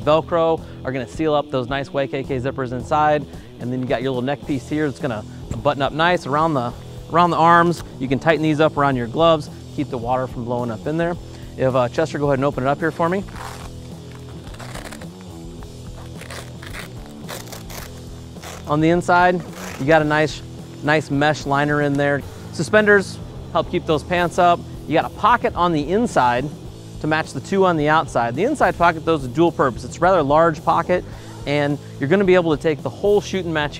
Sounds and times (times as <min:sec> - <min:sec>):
Speech: 0:00.0 - 0:13.3, 0:18.7 - 0:33.7
Music: 0:00.0 - 0:33.7.